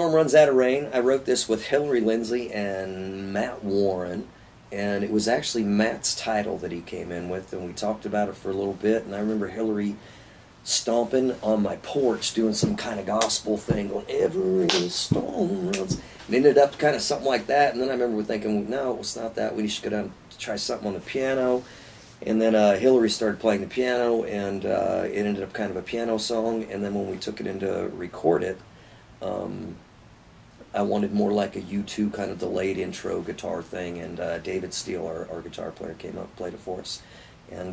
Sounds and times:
Speech: 0:00.0 - 0:10.0, 0:10.6 - 0:28.6, 0:29.2 - 0:29.8, 0:30.6 - 0:37.7.

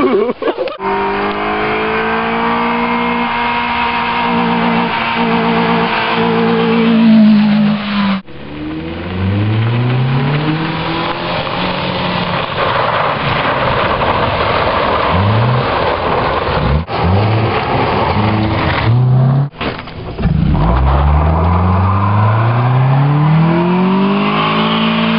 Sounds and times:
Skidding: 0:00.0 - 0:25.1.

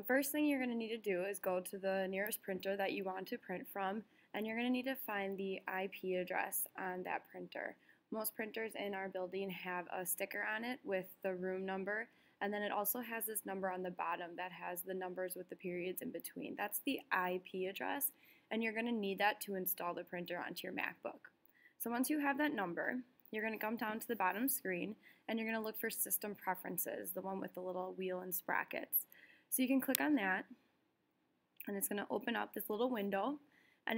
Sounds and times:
Speech: 0:00.0 - 0:30.6, 0:31.6 - 0:33.9.

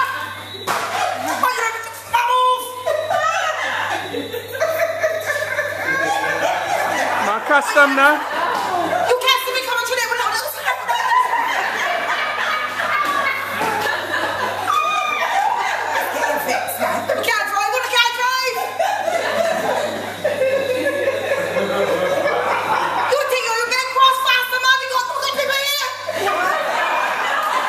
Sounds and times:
Laughter: 0:00.0 - 0:27.6
Female speech, woman speaking: 0:01.2 - 0:04.0, 0:07.2 - 0:08.3, 0:09.1 - 0:11.0, 0:16.0 - 0:18.8, 0:23.1 - 0:26.6.

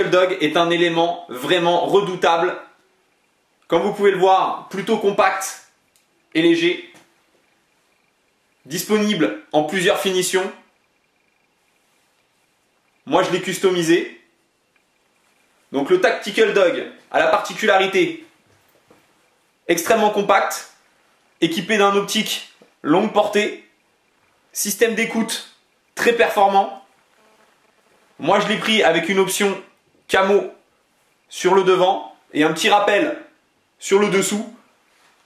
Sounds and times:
Speech: 0:00.0 - 0:02.8, 0:03.7 - 0:05.8, 0:06.4 - 0:07.0, 0:08.7 - 0:10.7, 0:13.1 - 0:14.2, 0:15.7 - 0:18.3, 0:19.7 - 0:20.8, 0:21.4 - 0:23.7, 0:24.6 - 0:26.9, 0:28.2 - 0:30.6, 0:31.3 - 0:34.7.

